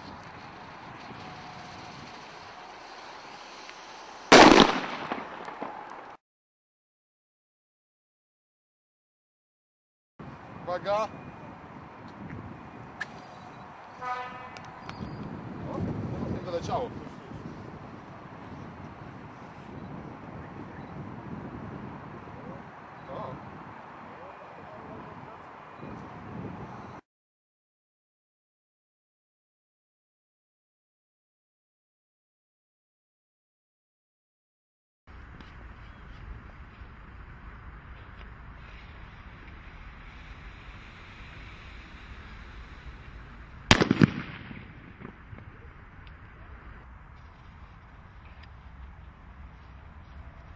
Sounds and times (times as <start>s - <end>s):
Firecracker: 0.0s - 6.2s, 37.4s - 46.4s
Speech: 10.6s - 11.1s, 15.6s - 17.4s, 23.1s - 23.4s, 24.1s - 25.5s.